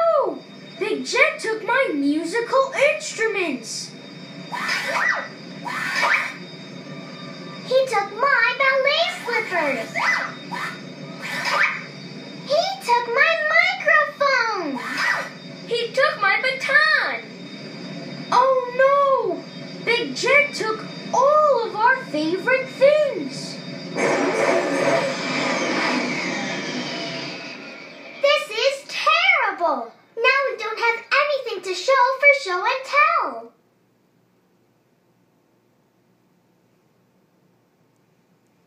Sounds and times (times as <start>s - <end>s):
Child speech, kid speaking: 0.0s - 4.0s, 7.7s - 10.2s, 12.5s - 17.3s, 18.3s - 23.6s, 28.2s - 33.6s
Television: 0.0s - 34.2s.